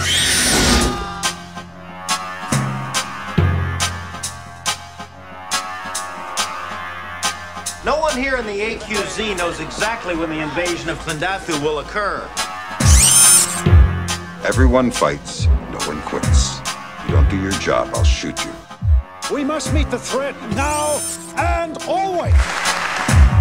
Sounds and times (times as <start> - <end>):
Music: 0.0 - 23.4
Speech: 7.8 - 12.3, 14.4 - 18.6, 19.3 - 22.4.